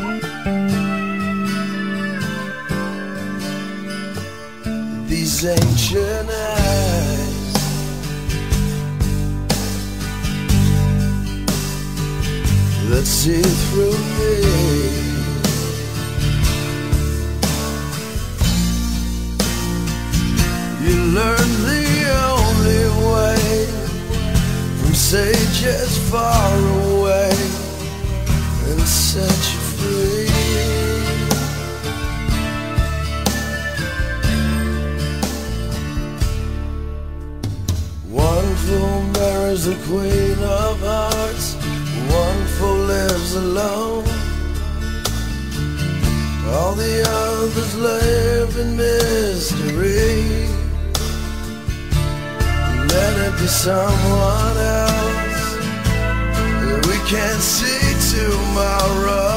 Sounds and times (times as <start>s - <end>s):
Music: 0.0s - 59.3s.